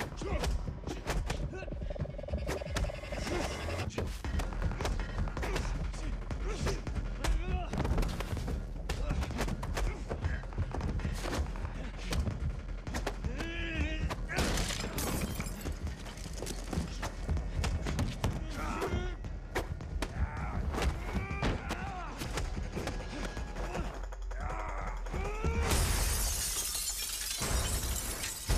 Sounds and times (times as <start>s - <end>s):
Music: 0.0s - 28.5s.